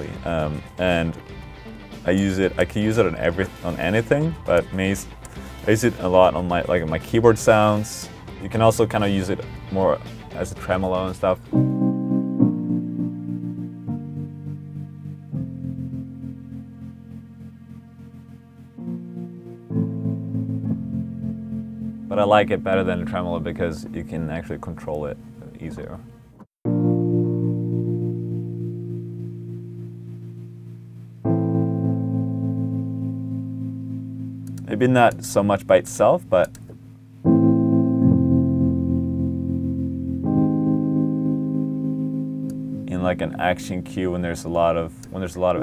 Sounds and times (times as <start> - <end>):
Musical instrument: 26.6 - 34.7.